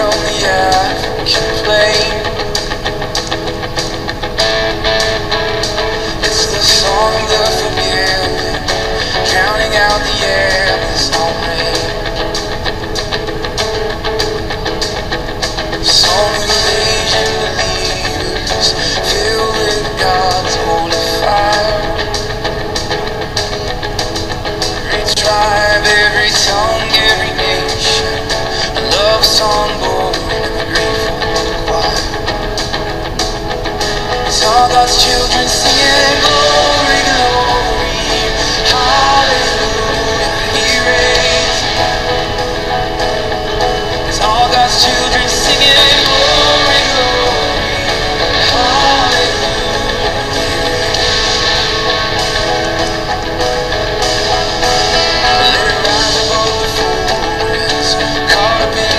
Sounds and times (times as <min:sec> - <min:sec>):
Blues: 0:00.0 - 0:58.9
Gospel music: 0:00.0 - 0:58.9.